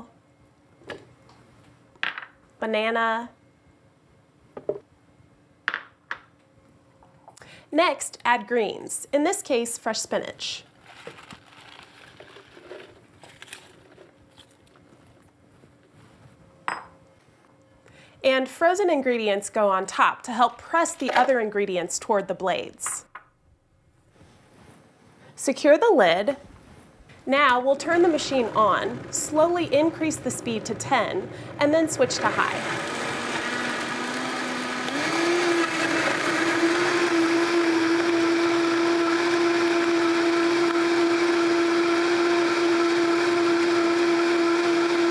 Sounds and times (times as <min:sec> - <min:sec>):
Blender: 0:10.9 - 0:14.0, 0:27.5 - 0:45.1.